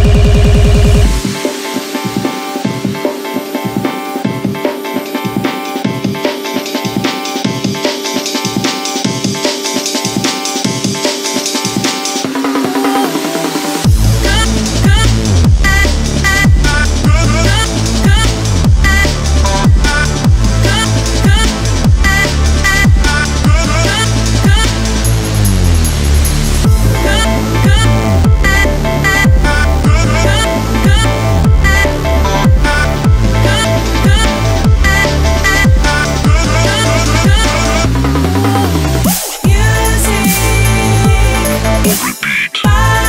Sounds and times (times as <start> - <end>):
Music: 0.0 - 43.0
Singing: 11.9 - 24.9, 26.9 - 43.0.